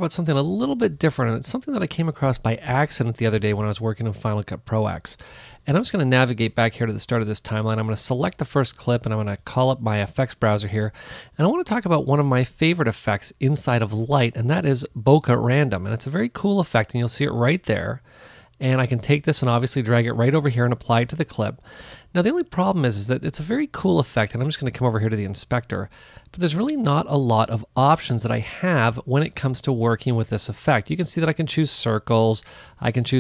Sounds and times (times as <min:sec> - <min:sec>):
Speech: 0:00.0 - 0:18.0, 0:18.6 - 0:33.2.